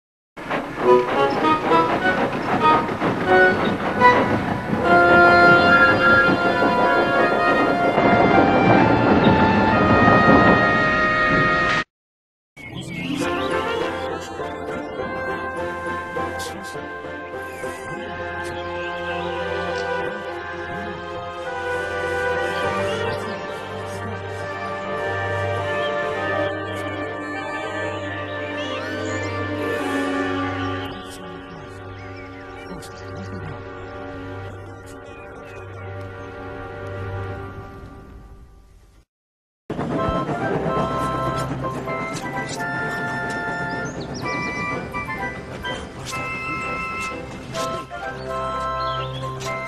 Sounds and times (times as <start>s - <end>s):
Scary music: 0.4s - 11.9s, 12.6s - 38.8s, 39.7s - 49.6s
Speech: 12.8s - 14.8s, 16.2s - 16.9s, 22.4s - 24.8s, 30.8s - 31.8s, 32.6s - 33.7s.